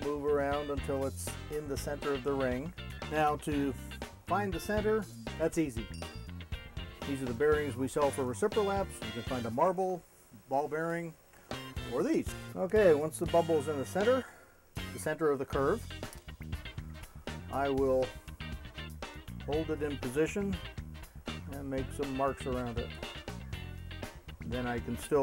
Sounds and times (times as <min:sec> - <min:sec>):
Speech: 0:00.0 - 0:05.9, 0:07.0 - 0:11.2, 0:11.9 - 0:14.4, 0:15.0 - 0:15.9, 0:17.5 - 0:18.2, 0:19.4 - 0:20.6, 0:21.5 - 0:23.0, 0:24.4 - 0:25.2
Music: 0:00.0 - 0:10.2, 0:11.1 - 0:25.2.